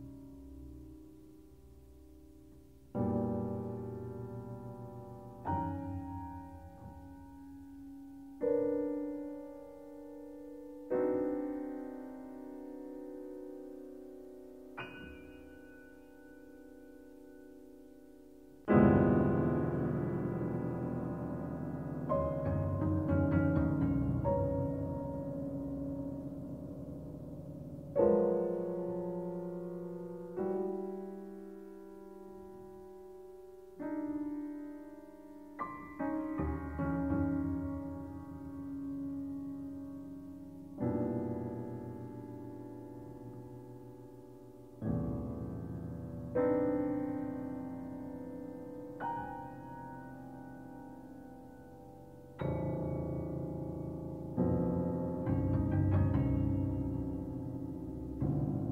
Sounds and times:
Piano: 0:00.0 - 0:58.7.

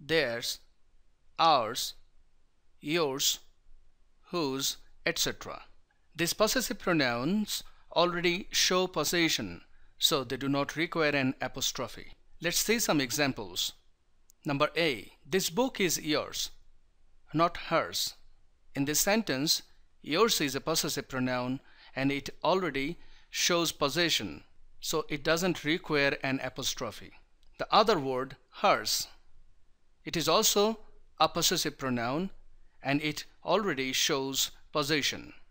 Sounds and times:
Speech: 0:00.0 - 0:00.7, 0:01.4 - 0:02.0, 0:02.8 - 0:03.4, 0:04.3 - 0:13.8, 0:14.4 - 0:16.6, 0:17.3 - 0:18.2, 0:18.8 - 0:29.2, 0:30.1 - 0:35.4.

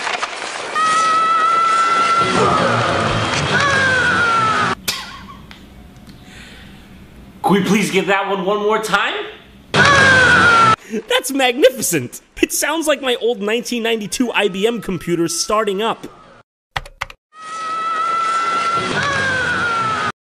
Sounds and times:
Speech: 0:07.4 - 0:09.4, 0:11.1 - 0:16.1.

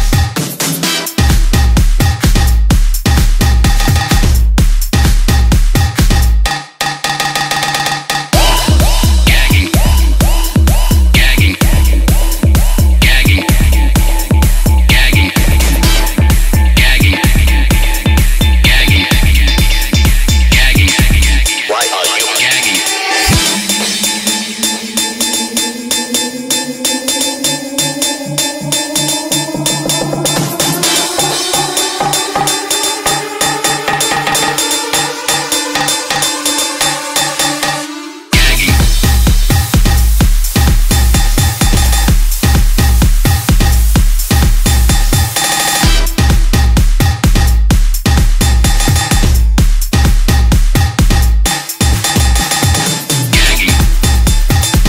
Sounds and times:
Music: 0:00.0 - 0:54.8.

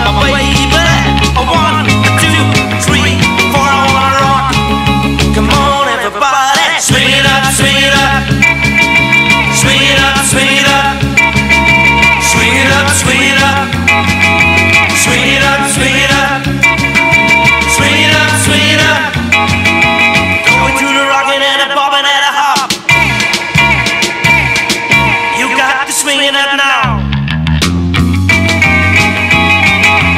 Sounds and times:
Music: 0:00.0 - 0:30.1.

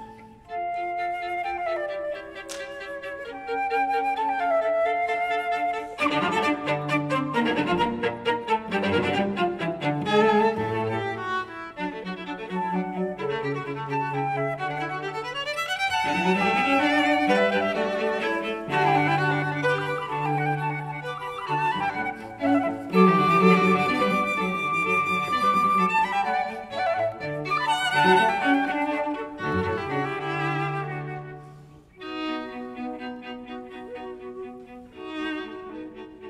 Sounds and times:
Violin, fiddle: 0:00.0 - 0:36.2.

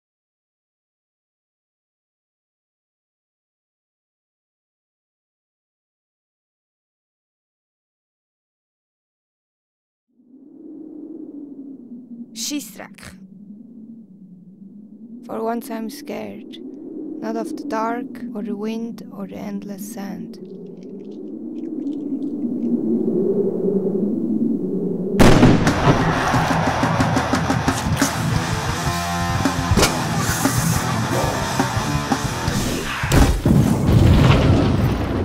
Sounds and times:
Speech: 0:12.4 - 0:13.2, 0:15.3 - 0:16.6, 0:17.2 - 0:20.4
Music: 0:25.7 - 0:33.2.

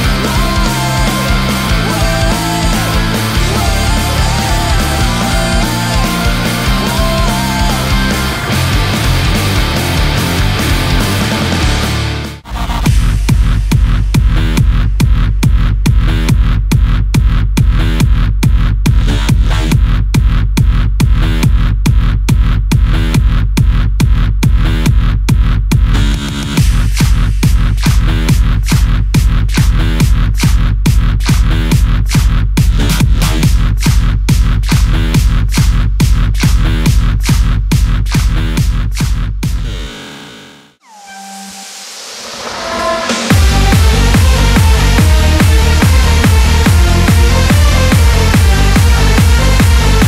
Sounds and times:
Music: 0:00.0 - 0:50.0.

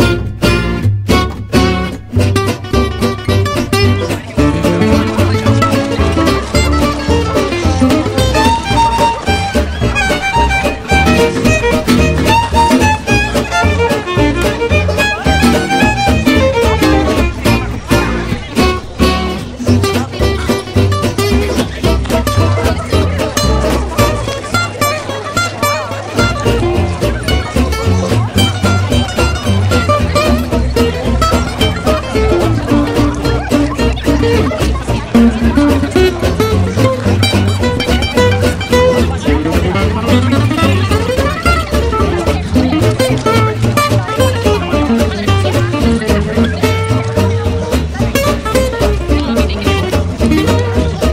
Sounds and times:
Music: 0:00.0 - 0:51.1
Speech: 0:00.0 - 0:51.1.

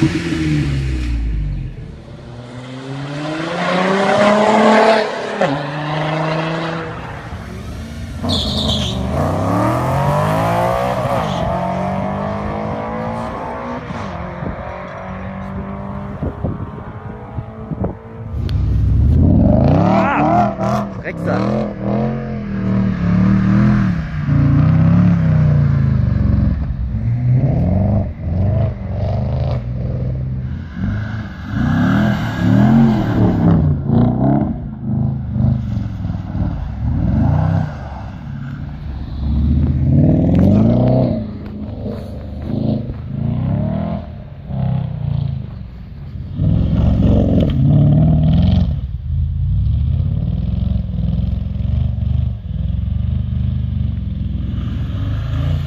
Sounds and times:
Car: 0:00.0 - 0:55.6.

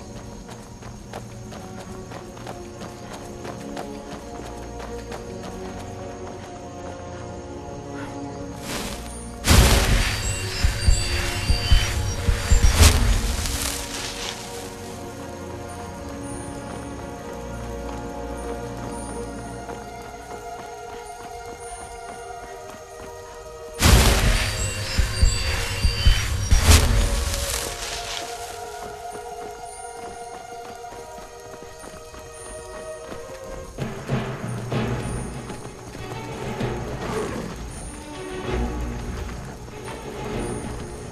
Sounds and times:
Clip-clop: 0:00.0 - 0:41.1
Music: 0:00.0 - 0:41.1.

